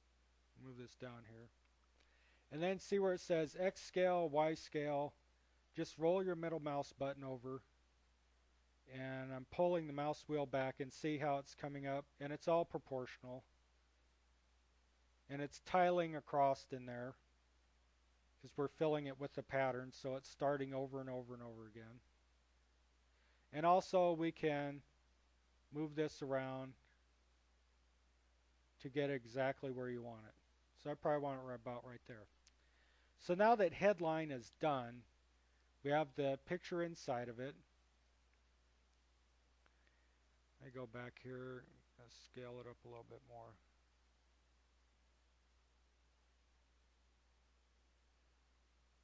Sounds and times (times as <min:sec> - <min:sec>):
Speech: 0:00.6 - 0:01.6, 0:02.5 - 0:07.7, 0:08.9 - 0:13.5, 0:15.3 - 0:17.2, 0:18.4 - 0:22.1, 0:23.5 - 0:24.9, 0:25.7 - 0:27.0, 0:28.8 - 0:32.4, 0:33.2 - 0:35.1, 0:35.8 - 0:37.7, 0:40.6 - 0:43.7.